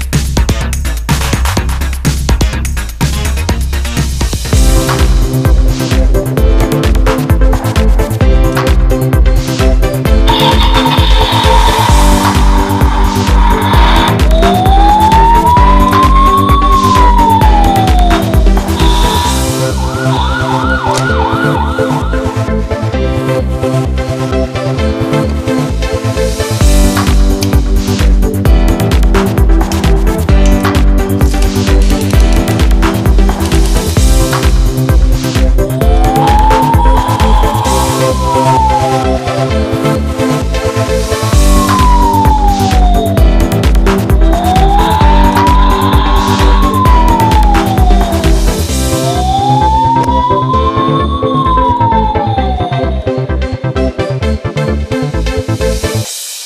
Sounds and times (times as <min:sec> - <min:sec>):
Music: 0:00.0 - 0:56.4.